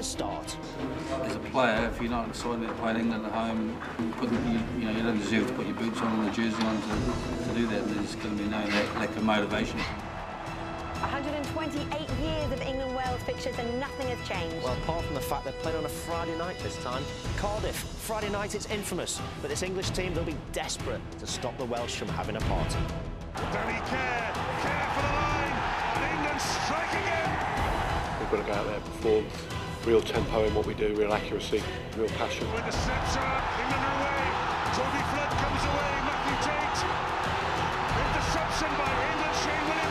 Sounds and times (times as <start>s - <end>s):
Music: 0.0s - 39.9s
Speech: 1.3s - 9.9s.